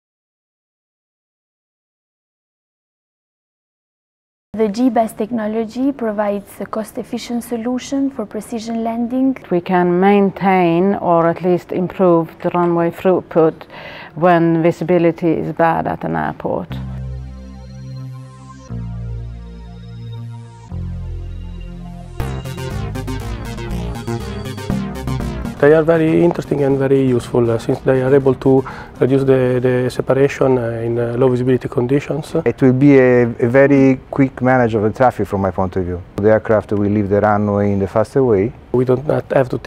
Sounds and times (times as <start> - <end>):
Speech: 4.6 - 13.6, 14.2 - 16.8, 25.6 - 39.6
Music: 16.7 - 32.4.